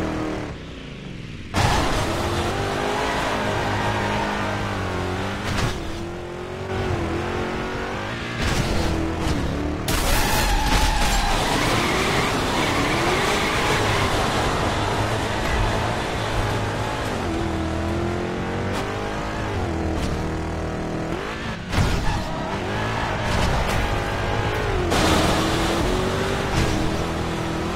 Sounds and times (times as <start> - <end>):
Skidding: 0.0 - 27.7.